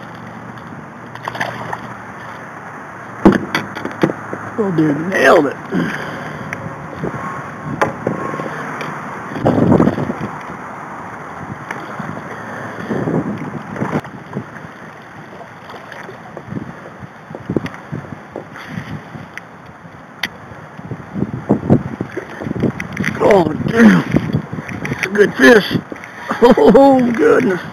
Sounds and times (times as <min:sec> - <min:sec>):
Rowboat, canoe, kayak: 0:00.0 - 0:27.7.